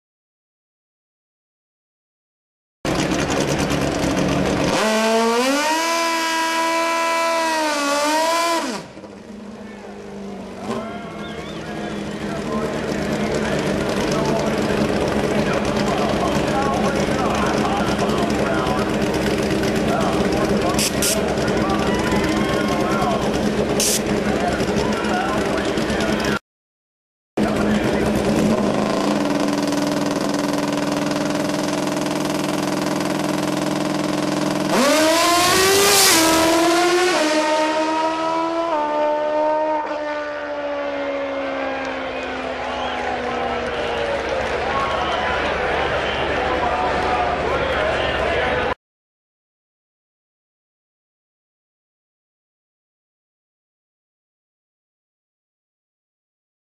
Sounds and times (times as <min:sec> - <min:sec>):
Speech: 0:09.6 - 0:23.4, 0:24.1 - 0:26.4, 0:27.4 - 0:28.3, 0:42.0 - 0:48.8.